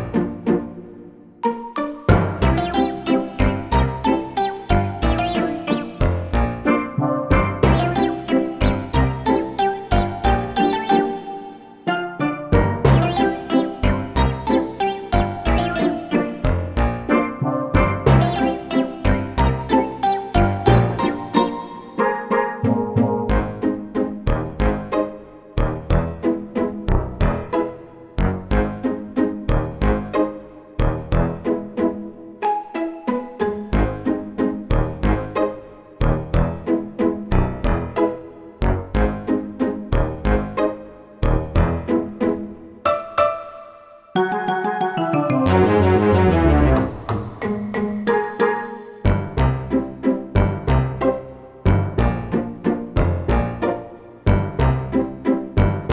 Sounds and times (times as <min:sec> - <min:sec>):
Soundtrack music: 0:00.0 - 0:55.9.